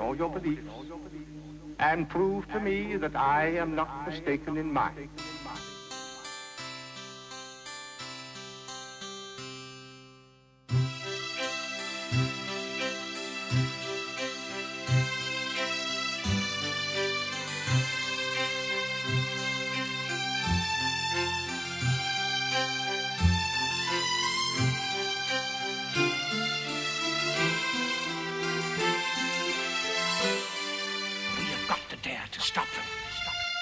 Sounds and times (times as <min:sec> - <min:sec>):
Music: 0:00.0 - 0:33.6.